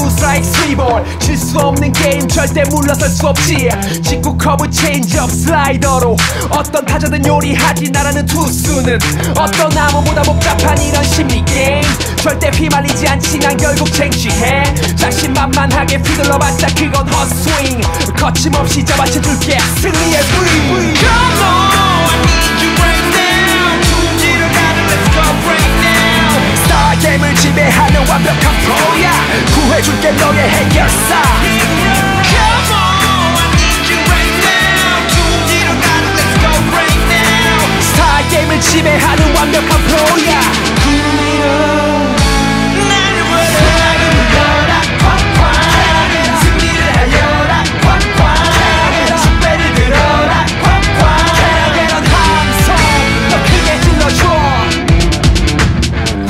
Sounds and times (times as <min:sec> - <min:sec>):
Music: 0:00.0 - 0:56.3.